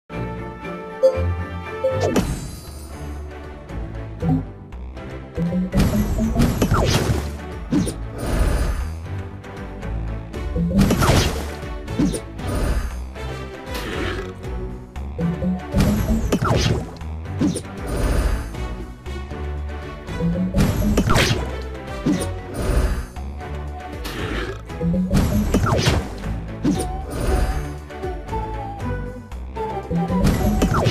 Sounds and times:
Music: 0.0 - 30.9.

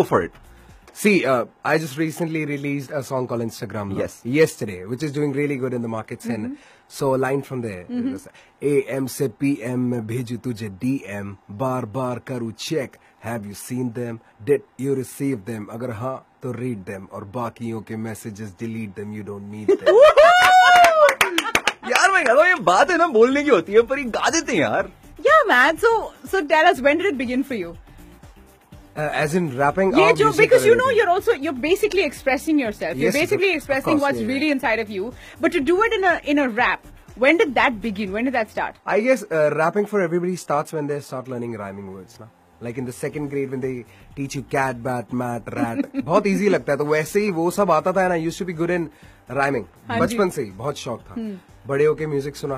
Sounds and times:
Speech: 1.0 - 19.6, 29.1 - 31.5, 49.4 - 52.5.

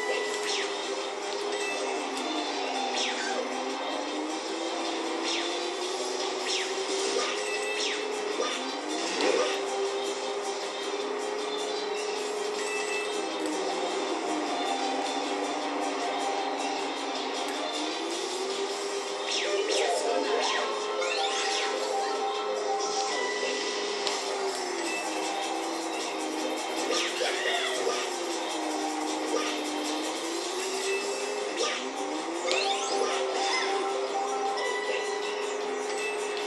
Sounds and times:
Television: 0.0 - 36.4.

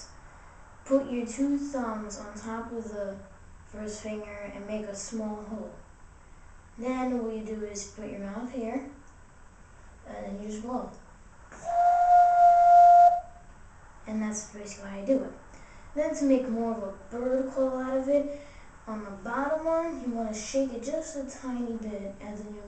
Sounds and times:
Wind instrument, woodwind instrument: 11.6 - 13.4.

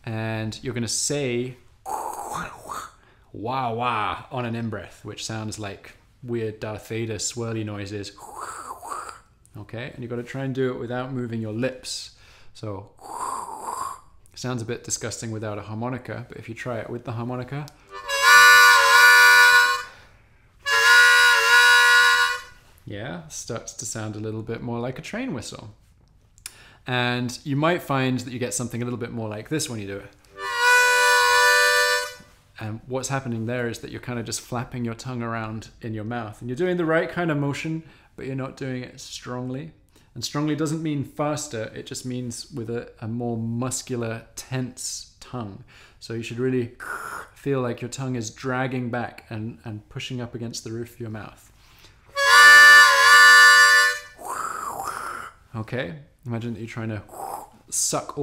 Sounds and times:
Speech: 0.0 - 13.0, 14.4 - 17.8, 22.8 - 25.8, 26.9 - 30.2, 32.6 - 46.8, 47.4 - 51.5, 55.5 - 58.2
Harmonica: 17.9 - 22.7, 30.3 - 32.4, 52.1 - 55.4.

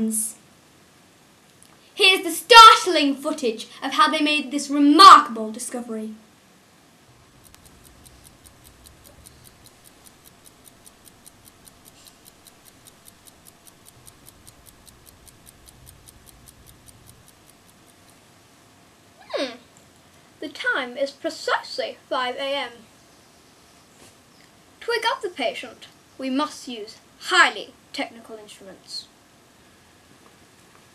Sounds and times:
Speech: 0.0 - 0.4, 2.0 - 6.3, 20.4 - 22.9, 24.8 - 29.1.

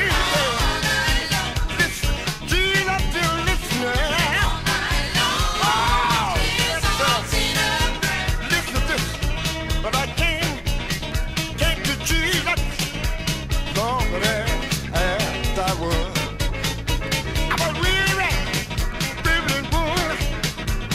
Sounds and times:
Musical instrument: 0.0 - 20.9.

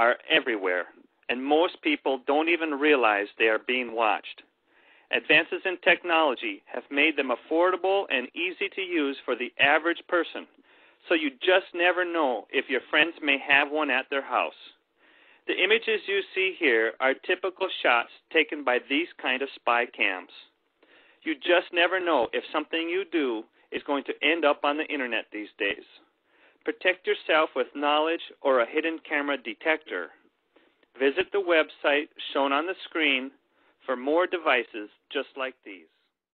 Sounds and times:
Speech: 0.0 - 4.5, 5.1 - 14.8, 15.4 - 20.6, 21.2 - 30.2, 30.9 - 35.9.

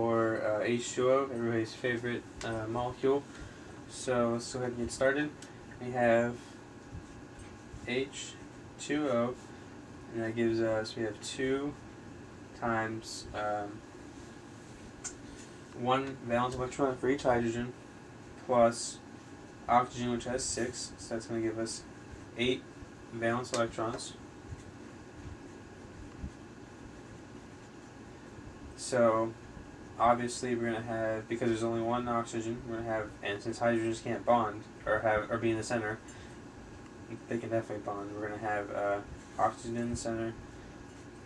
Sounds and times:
Speech: 0.0 - 3.3, 3.9 - 6.5, 7.8 - 9.4, 10.1 - 11.8, 12.6 - 13.8, 15.8 - 17.8, 18.4 - 19.0, 19.7 - 24.2, 28.8 - 29.4, 30.0 - 36.0, 37.1 - 40.4.

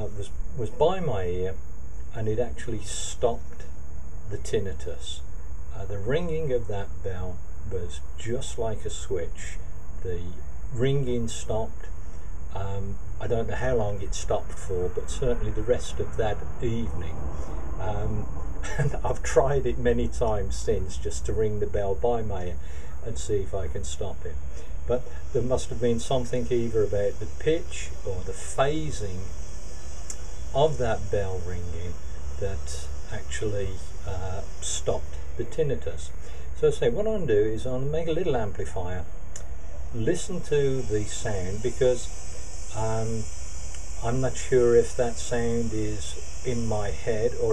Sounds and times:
Male speech, man speaking: 0.0 - 1.6, 2.2 - 3.7, 4.3 - 11.9, 12.5 - 17.2, 17.8 - 29.3, 30.6 - 39.1, 40.0 - 42.1, 42.7 - 43.3, 44.0 - 47.5.

